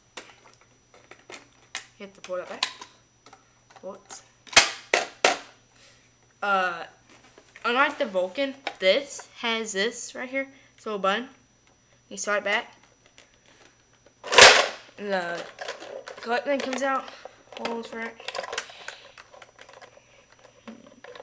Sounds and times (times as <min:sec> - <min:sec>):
Child speech, kid speaking: 0:02.0 - 0:02.7, 0:03.8 - 0:04.2, 0:06.4 - 0:06.9, 0:07.7 - 0:11.4, 0:12.1 - 0:12.7, 0:15.0 - 0:15.5, 0:16.2 - 0:18.3.